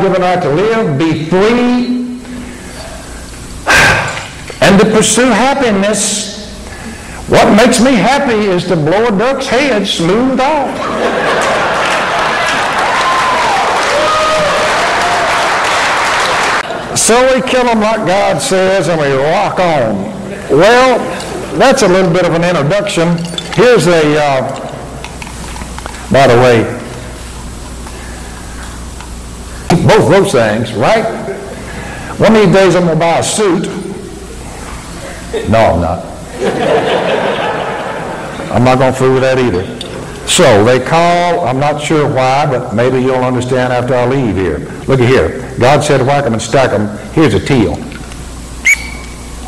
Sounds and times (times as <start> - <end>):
Speech: 0.0 - 2.1, 4.6 - 6.5, 7.3 - 10.8, 16.9 - 24.6, 26.1 - 26.8, 29.7 - 31.3, 32.2 - 33.9, 35.3 - 36.1, 38.5 - 47.9.